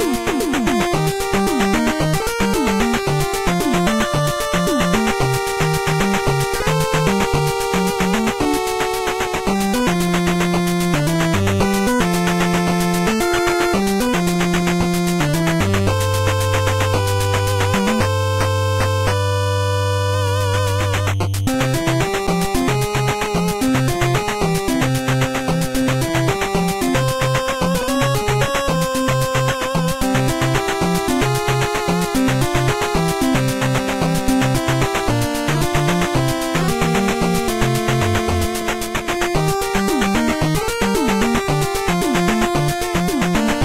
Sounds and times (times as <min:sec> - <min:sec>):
Soundtrack music: 0:00.0 - 0:43.6.